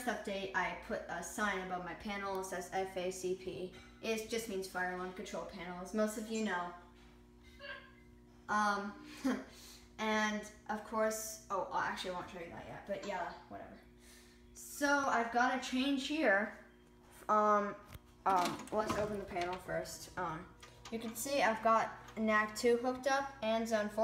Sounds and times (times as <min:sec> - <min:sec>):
Speech: 0:00.0 - 0:06.8, 0:10.0 - 0:13.8, 0:14.6 - 0:16.6, 0:17.3 - 0:24.0.